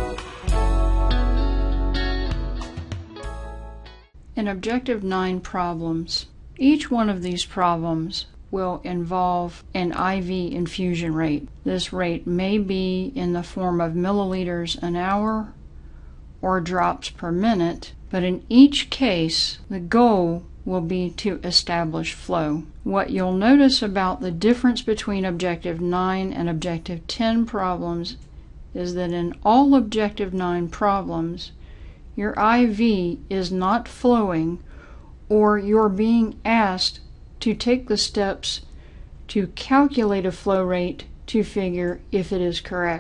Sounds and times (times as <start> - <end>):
Speech: 4.4 - 15.6, 16.4 - 28.2, 28.8 - 31.6, 32.2 - 34.6, 35.3 - 38.7, 39.3 - 43.0.